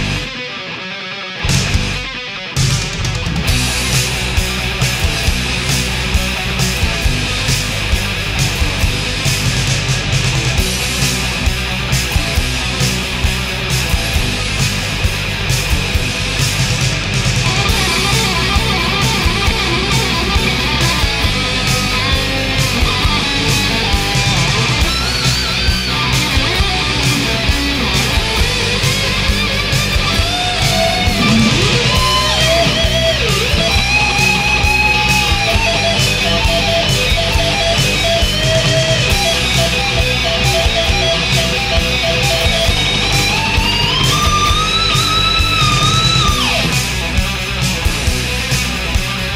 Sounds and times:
Heavy metal: 0:00.0 - 0:49.3.

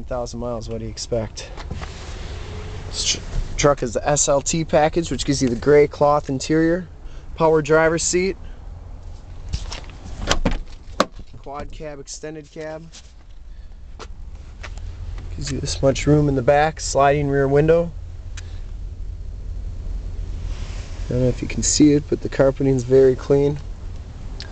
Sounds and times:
Car: 0:00.0 - 0:24.5.

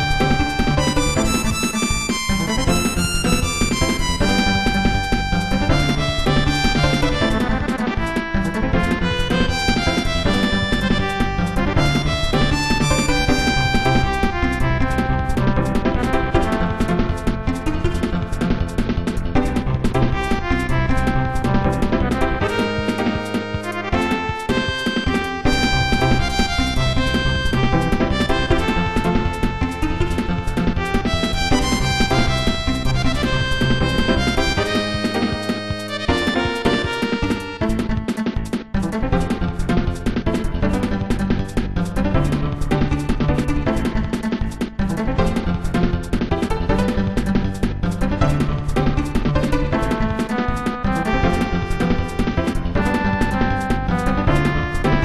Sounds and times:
Exciting music: 0:00.0 - 0:55.0.

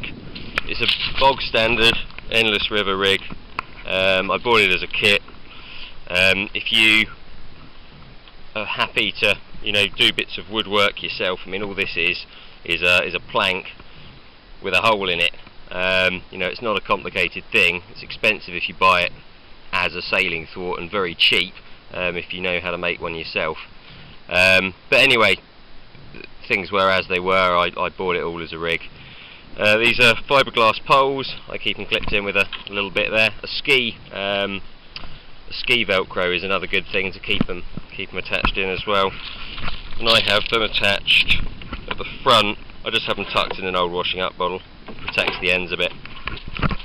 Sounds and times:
Speech: 0:00.7 - 0:03.2, 0:03.9 - 0:05.2, 0:06.1 - 0:07.1, 0:08.6 - 0:13.8, 0:14.6 - 0:19.2, 0:19.8 - 0:23.6, 0:24.3 - 0:25.4, 0:26.2 - 0:28.9, 0:29.6 - 0:34.6, 0:35.5 - 0:39.2, 0:40.0 - 0:45.9.

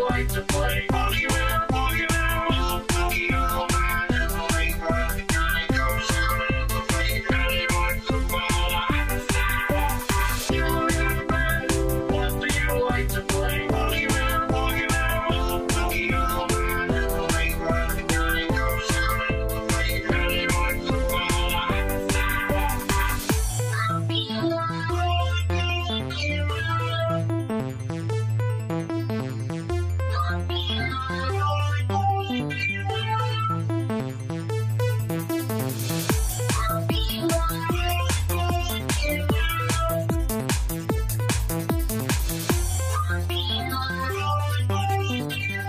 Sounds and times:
Music: 0:00.0 - 0:45.6.

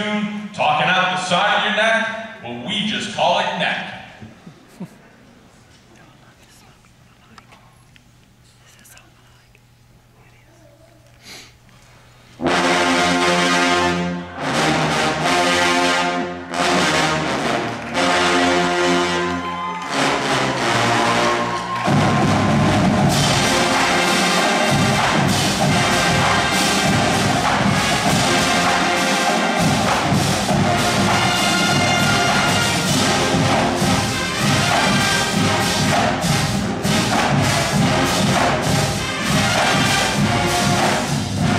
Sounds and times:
Music: 0:12.4 - 0:41.5
Cheering: 0:17.6 - 0:25.4.

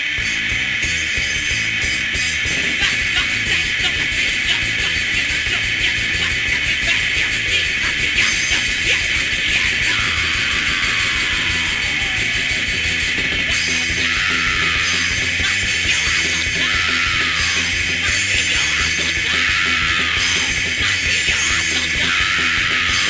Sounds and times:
Music: 0:00.0 - 0:23.0.

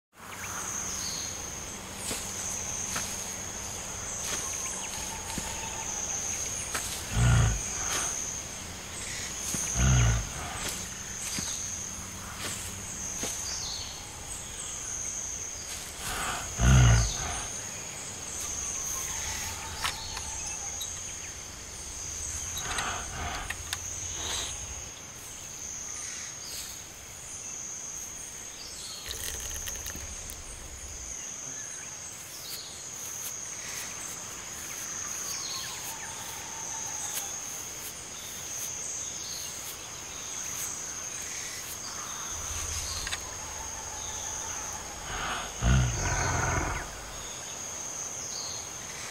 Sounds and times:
Outside, rural or natural: 0:00.1 - 0:49.1
Animal: 0:00.4 - 0:25.4, 0:29.0 - 0:31.6, 0:33.7 - 0:38.6, 0:40.4 - 0:47.5.

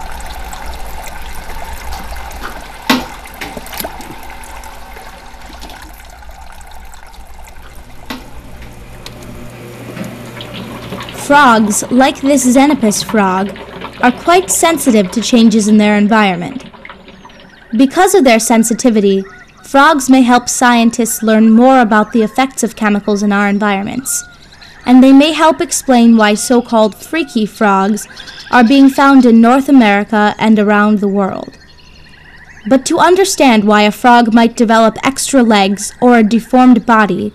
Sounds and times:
Speech: 0:11.2 - 0:16.6, 0:17.8 - 0:24.2, 0:24.9 - 0:31.6, 0:32.7 - 0:37.3.

